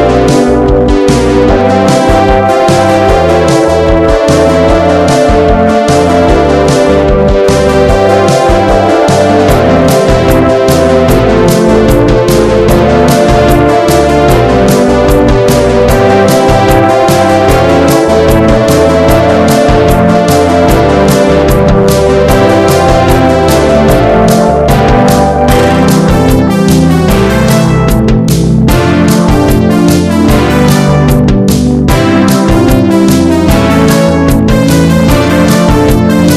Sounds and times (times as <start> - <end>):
Music: 0.0 - 36.3.